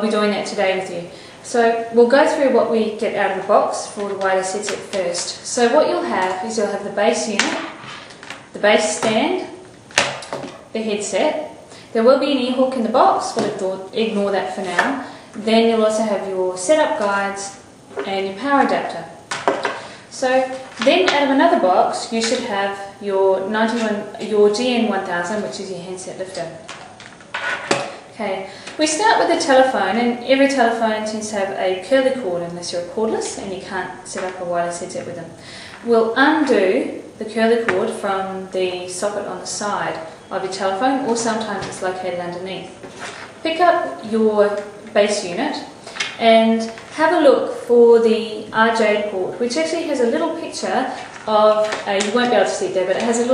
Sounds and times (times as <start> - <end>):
Speech: 0.0 - 7.8, 8.6 - 9.6, 10.8 - 19.2, 20.1 - 26.7, 28.2 - 42.8, 43.5 - 53.3.